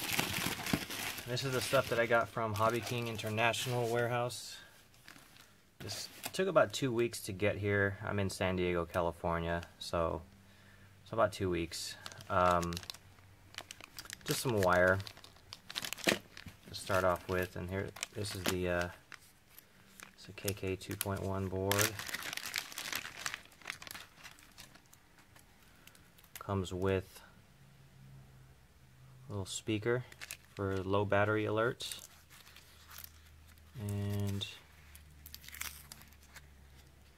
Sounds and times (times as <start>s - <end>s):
Crumpling, crinkling: 0.0s - 4.1s, 11.9s - 26.5s, 30.0s - 30.9s, 31.8s - 37.1s
Inside, small room: 0.0s - 37.1s
Speech: 1.3s - 4.7s, 5.8s - 10.2s, 11.1s - 12.8s, 14.3s - 15.0s, 16.7s - 19.0s, 20.2s - 22.0s, 26.4s - 27.3s, 29.3s - 32.0s, 33.8s - 34.6s.